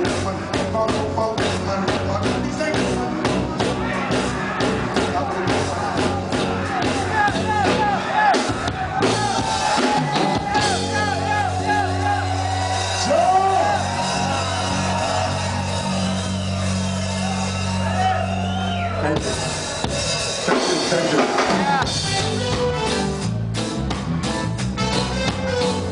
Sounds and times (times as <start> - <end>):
Music: 0.0 - 25.9.